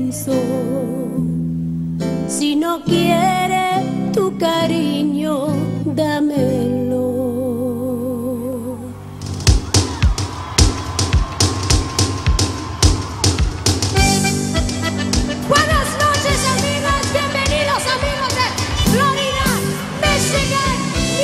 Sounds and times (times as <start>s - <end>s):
Music: 0.0s - 21.2s.